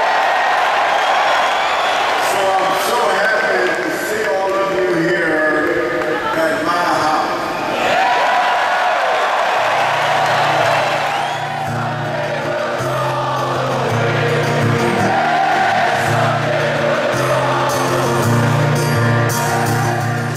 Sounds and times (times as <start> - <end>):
Music: 9.8 - 20.3
Singing: 11.2 - 20.3.